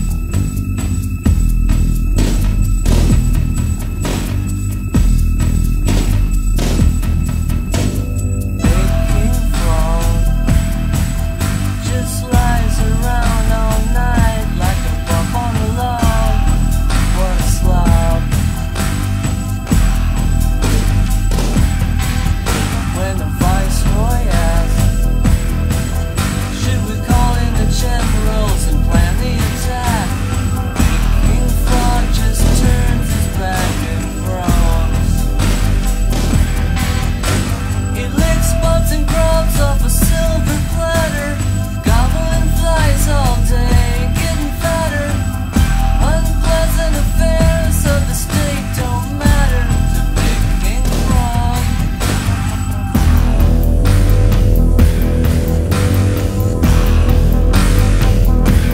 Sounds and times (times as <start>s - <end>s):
Music: 0.0s - 58.7s.